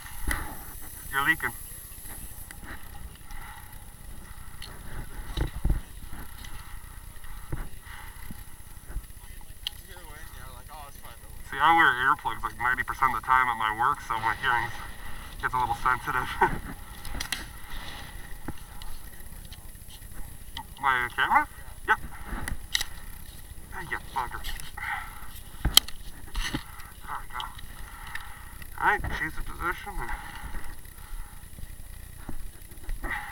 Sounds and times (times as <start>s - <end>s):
Speech: 9.2s - 14.8s, 15.4s - 16.5s, 20.8s - 21.5s, 28.8s - 30.2s.